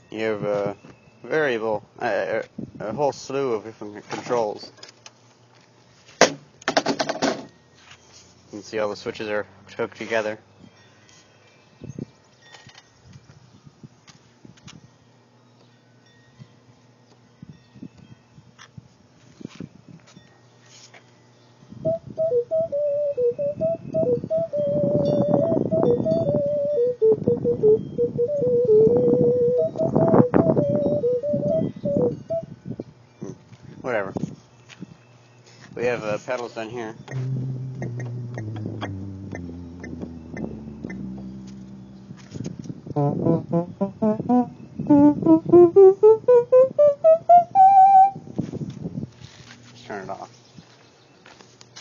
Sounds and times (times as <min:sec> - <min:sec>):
Electronic organ: 0:21.8 - 0:32.5, 0:37.1 - 0:48.2.